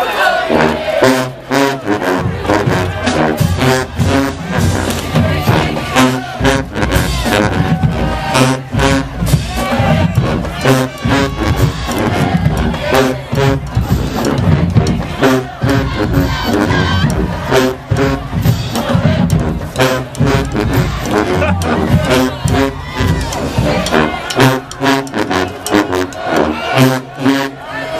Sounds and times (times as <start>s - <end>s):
Music: 0.2s - 27.9s.